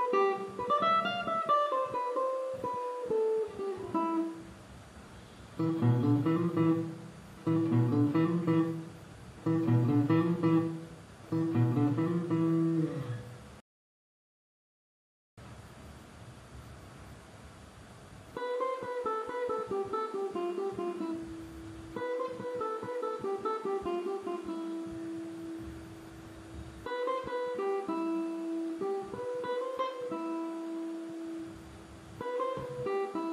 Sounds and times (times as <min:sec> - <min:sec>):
Acoustic guitar: 0:00.0 - 0:13.6, 0:18.3 - 0:33.3
Strum: 0:05.2 - 0:13.6, 0:18.4 - 0:33.3.